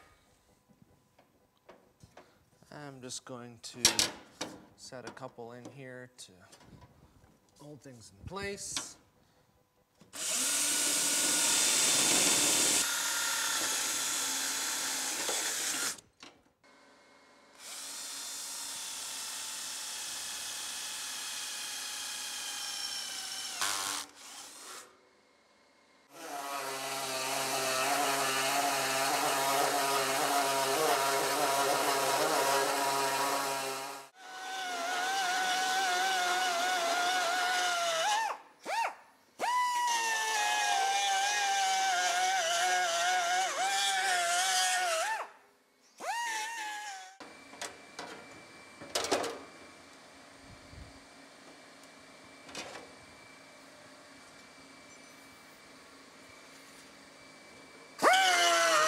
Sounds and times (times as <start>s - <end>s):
Speech: 2.6s - 4.1s, 4.8s - 6.6s, 7.6s - 9.0s
Drill: 10.1s - 16.0s, 17.5s - 25.0s, 26.0s - 45.3s, 46.0s - 47.6s, 58.0s - 58.8s.